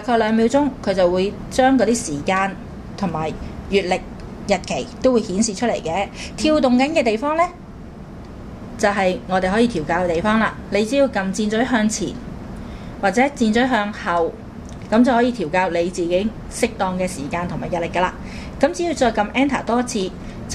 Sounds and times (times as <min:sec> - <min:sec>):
Speech: 0:00.0 - 0:07.6, 0:08.8 - 0:12.2, 0:13.0 - 0:20.5.